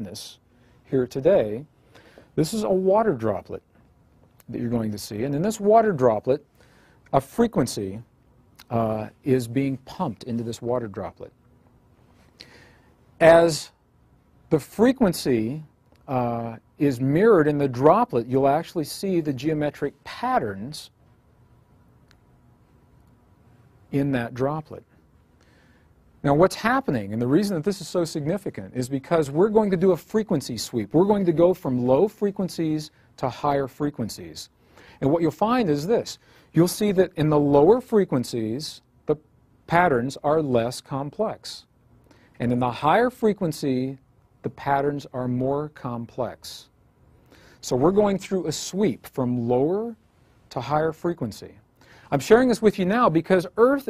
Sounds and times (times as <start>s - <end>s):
Speech: 0.0s - 1.7s, 2.4s - 3.7s, 4.4s - 6.5s, 7.1s - 11.4s, 13.2s - 13.8s, 14.5s - 21.0s, 23.9s - 24.9s, 26.2s - 41.7s, 42.4s - 46.7s, 47.6s - 53.9s.